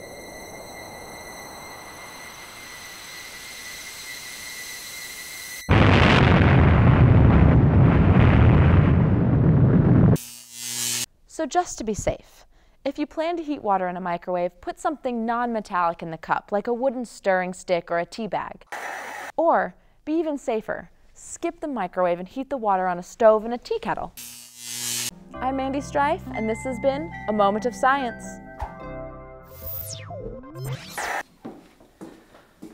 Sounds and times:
Speech: 11.3 - 18.6, 19.4 - 24.1, 25.4 - 28.4
Music: 25.1 - 30.7.

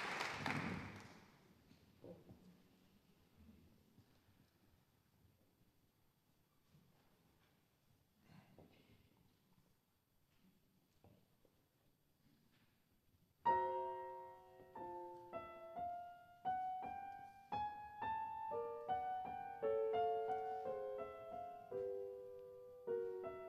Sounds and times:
Music: 13.5 - 23.4.

